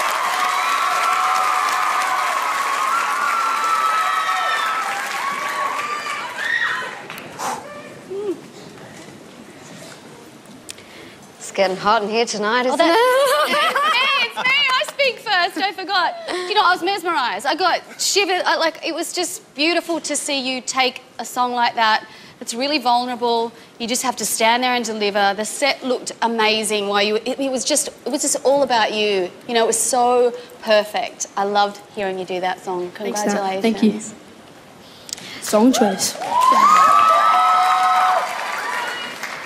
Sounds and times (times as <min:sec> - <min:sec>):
Female speech, woman speaking: 0:11.4 - 0:34.2.